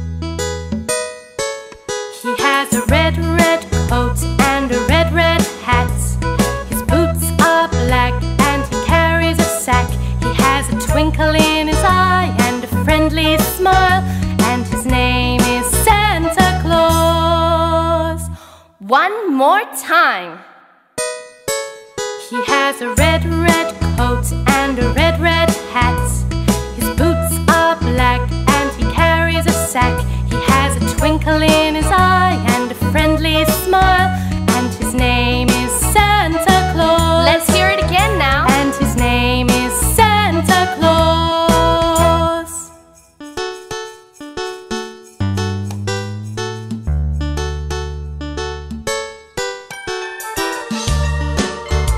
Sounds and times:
Music for children: 0.0s - 18.6s, 21.0s - 51.9s
Christmas music: 0.0s - 20.3s, 20.9s - 51.9s.

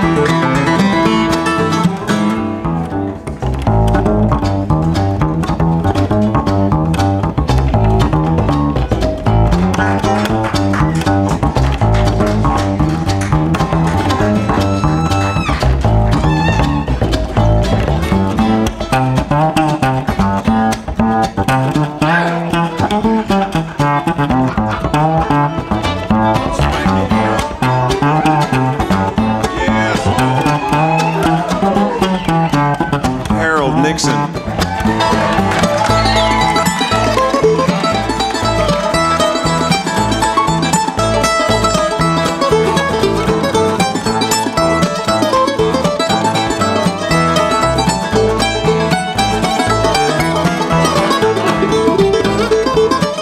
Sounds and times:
Banjo: 0.0s - 53.2s
Country: 0.0s - 53.2s.

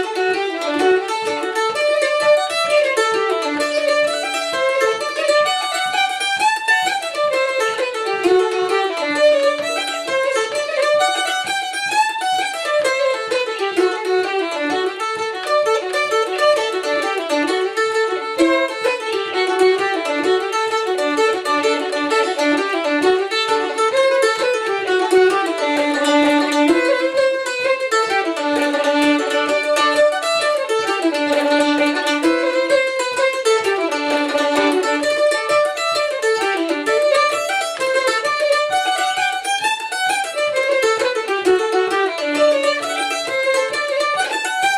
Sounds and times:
Pizzicato: 0.0s - 44.7s.

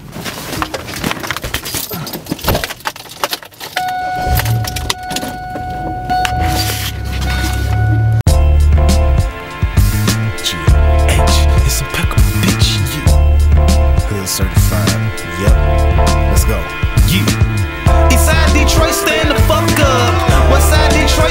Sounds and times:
Outside, urban or manmade: 0.0s - 18.3s
Music: 7.6s - 21.3s.

